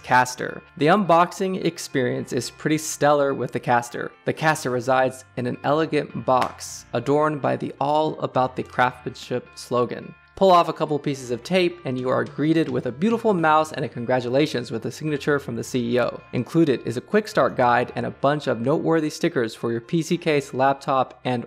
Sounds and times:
Music: 0:00.0 - 0:21.4
Speech: 0:00.0 - 0:21.4.

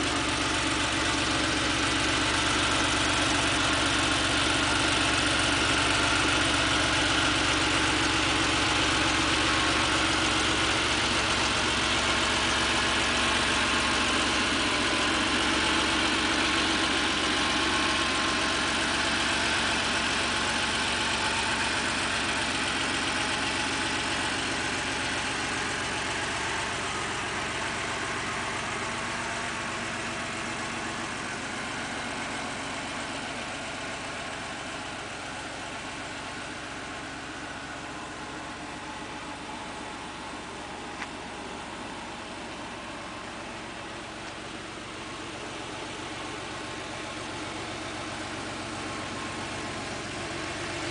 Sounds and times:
Vehicle: 0:00.0 - 0:50.9.

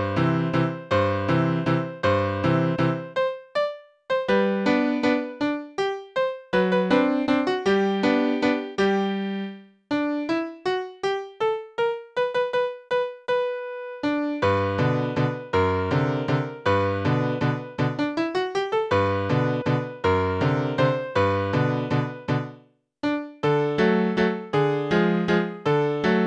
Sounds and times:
Tender music: 0:00.0 - 0:12.2.

